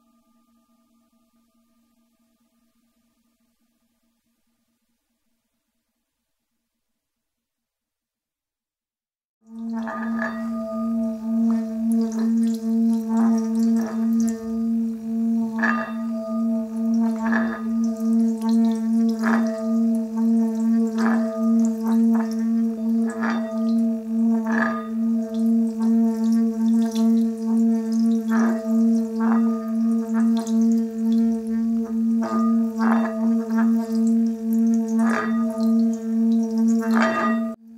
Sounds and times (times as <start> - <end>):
Singing bowl: 0.0 - 4.2, 9.5 - 37.7.